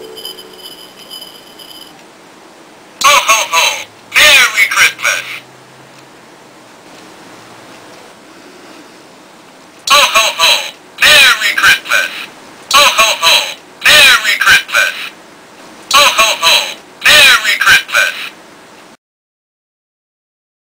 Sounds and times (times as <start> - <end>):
Speech: 3.0 - 5.4, 9.9 - 15.2, 15.9 - 18.4.